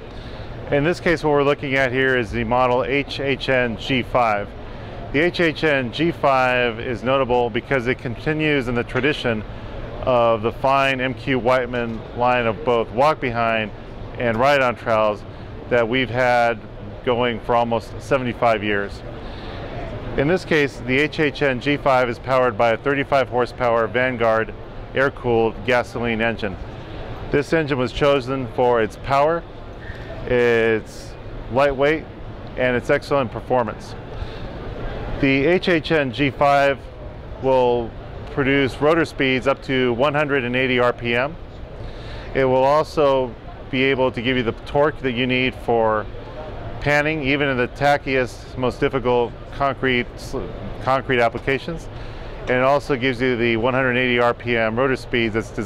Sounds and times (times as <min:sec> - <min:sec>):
Speech: 0:00.7 - 0:19.1, 0:19.8 - 0:26.6, 0:27.3 - 0:29.5, 0:30.2 - 0:34.0, 0:35.2 - 0:41.4, 0:42.4 - 0:51.9, 0:52.5 - 0:55.6.